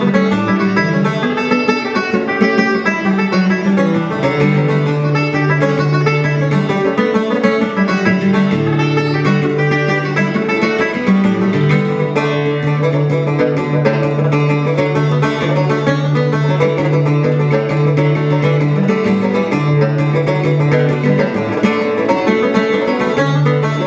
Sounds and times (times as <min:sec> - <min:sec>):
Music: 0:00.0 - 0:23.8.